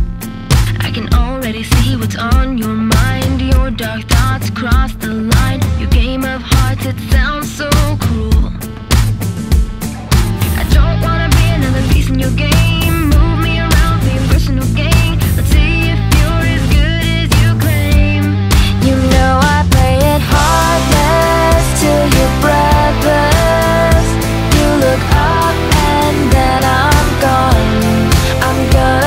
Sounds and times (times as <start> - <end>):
Pop music: 0.0 - 29.0.